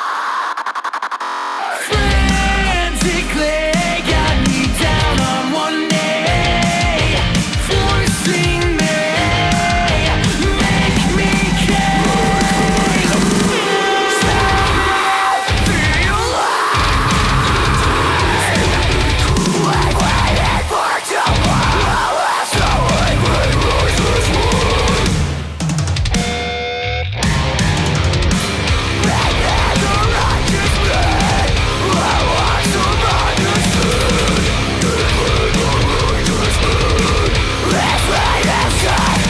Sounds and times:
Music: 1.0s - 39.3s.

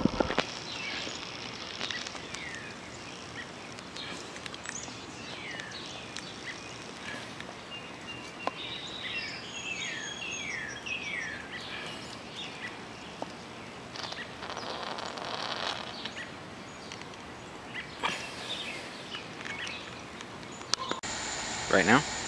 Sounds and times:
Outside, rural or natural: 0.0s - 22.2s.

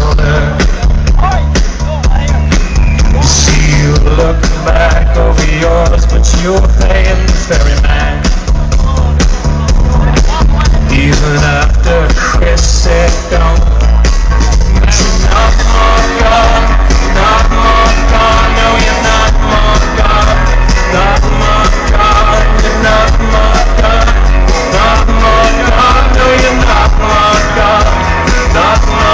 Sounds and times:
Music: 0.0s - 29.1s
Speech: 1.2s - 2.5s, 8.8s - 11.2s.

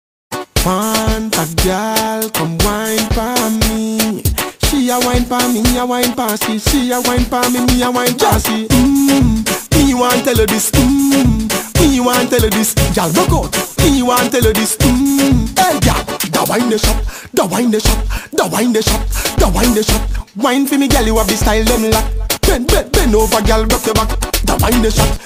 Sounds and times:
Afrobeat: 0.3s - 25.2s
Reggae: 0.3s - 25.2s.

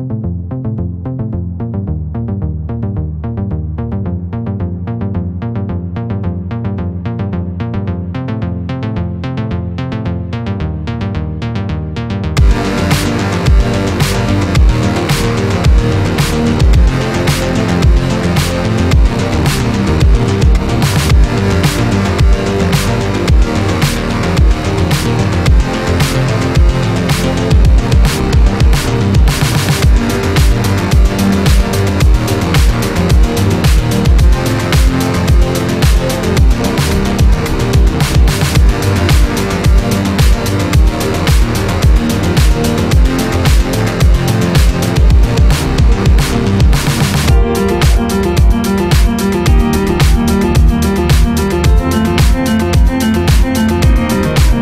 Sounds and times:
Music: 0.0s - 54.6s.

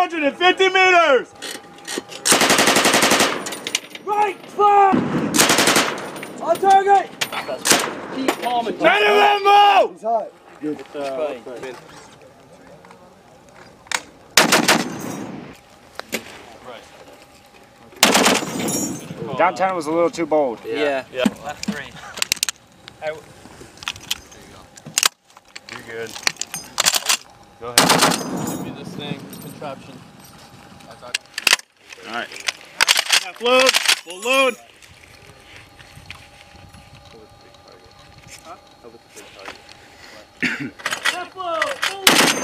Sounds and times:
Machine gun: 2.3s - 3.5s, 5.2s - 6.2s, 14.4s - 15.1s, 18.0s - 18.7s, 27.8s - 28.4s, 42.0s - 42.4s.

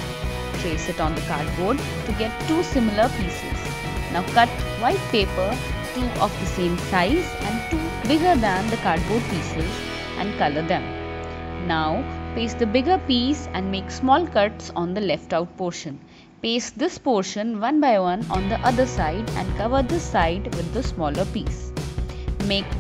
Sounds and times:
Music: 0.0s - 22.8s
Speech: 0.6s - 10.9s, 11.6s - 21.6s, 22.4s - 22.8s.

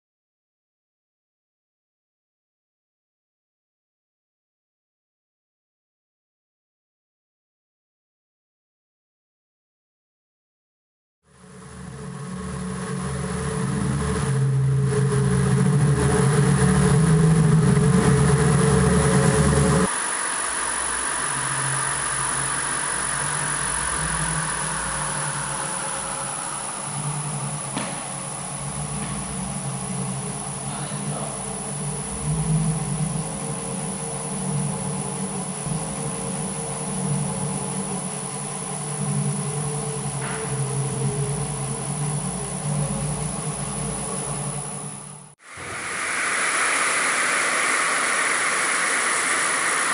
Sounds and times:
Speech: 30.6s - 31.7s.

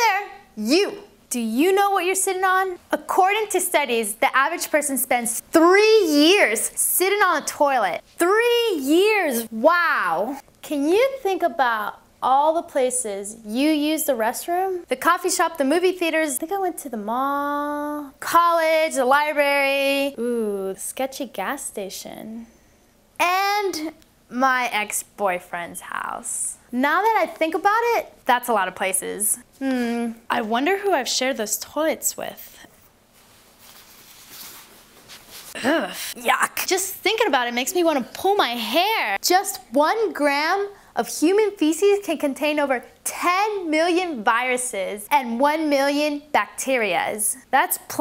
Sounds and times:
Speech: 0.0s - 22.5s, 23.2s - 32.7s, 35.6s - 48.0s.

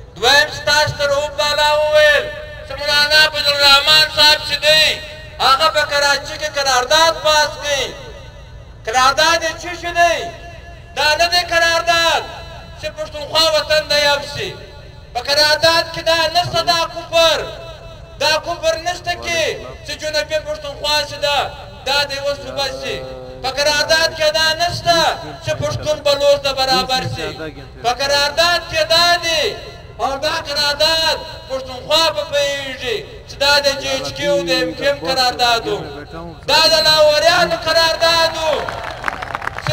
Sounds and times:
Narration, monologue: 0.0s - 39.7s
Male speech, man speaking: 0.2s - 8.1s, 8.9s - 10.4s, 11.0s - 38.7s.

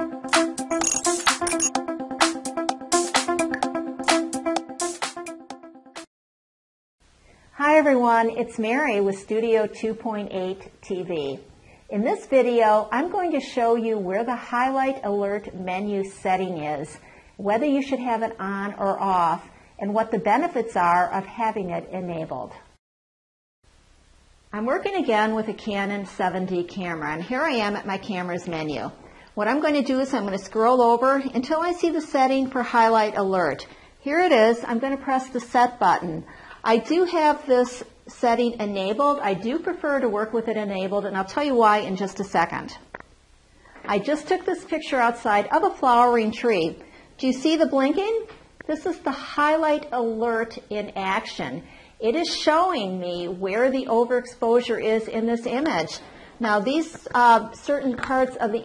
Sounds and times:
Speech: 7.6s - 22.7s, 24.5s - 42.9s, 43.9s - 58.6s.

